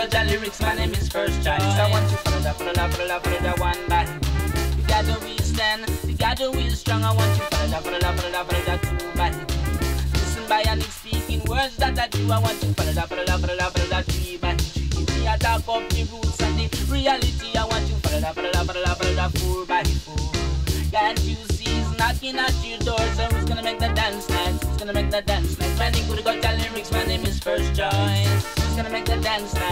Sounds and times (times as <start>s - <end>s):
Music: 0.0s - 29.7s.